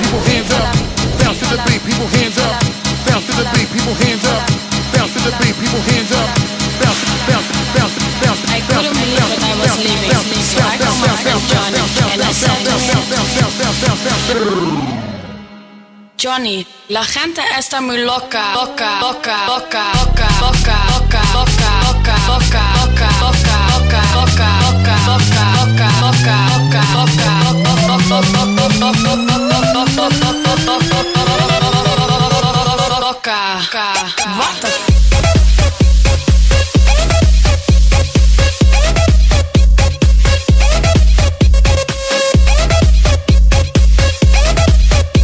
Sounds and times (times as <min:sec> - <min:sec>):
Electronic dance music: 0:00.0 - 0:15.0, 0:18.4 - 0:45.2
Speech: 0:07.3 - 0:13.6, 0:16.2 - 0:20.0, 0:33.3 - 0:34.9.